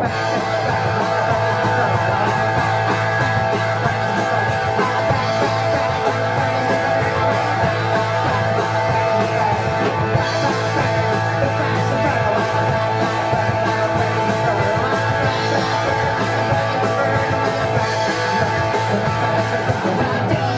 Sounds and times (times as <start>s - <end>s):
Drum kit: 0.0s - 20.5s
Guitar: 0.0s - 20.5s
Rock and roll: 0.0s - 20.5s
Singing: 0.0s - 20.5s.